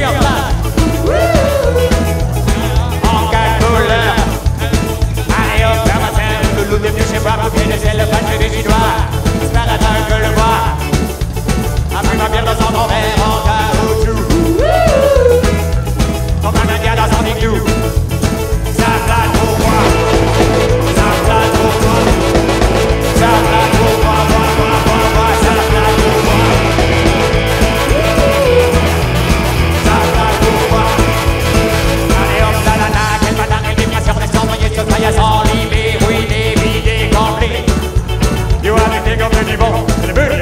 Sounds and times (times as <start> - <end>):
Music: 0.0 - 40.4.